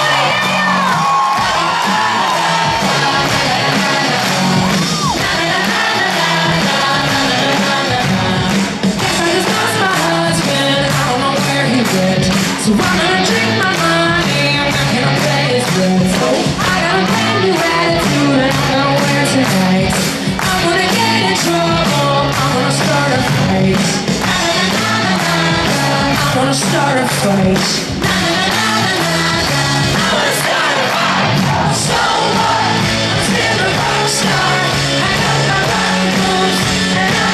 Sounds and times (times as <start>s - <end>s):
Inside, large room or hall: 0.0s - 37.3s
Music: 0.0s - 37.3s.